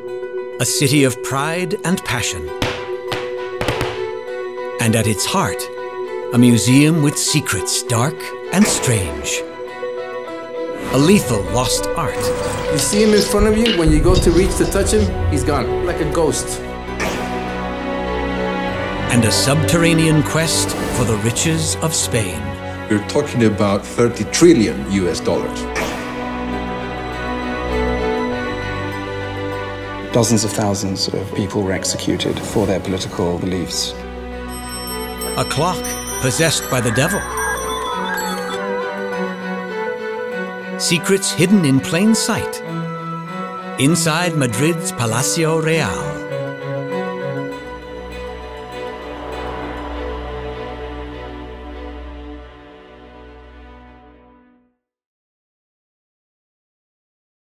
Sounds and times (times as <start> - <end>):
Music: 0.0 - 55.0
Speech: 0.6 - 2.5, 4.8 - 5.7, 6.3 - 9.5, 10.8 - 16.6, 19.1 - 25.7, 30.1 - 34.0, 35.4 - 37.4, 40.8 - 42.6, 43.8 - 46.3.